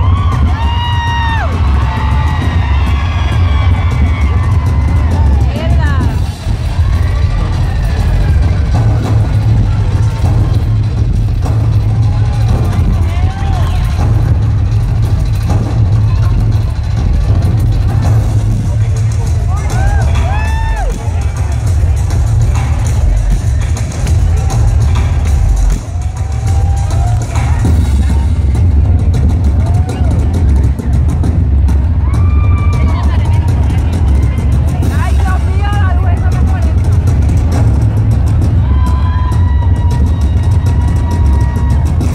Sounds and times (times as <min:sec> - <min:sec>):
Music: 0:00.0 - 0:42.1
Speech: 0:34.8 - 0:36.8.